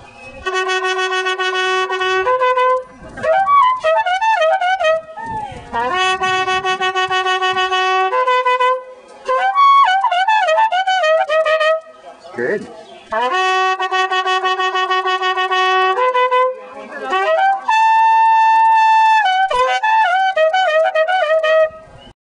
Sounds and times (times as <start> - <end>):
Traditional music: 0.0 - 22.0
Speech: 12.0 - 13.1, 16.6 - 17.5.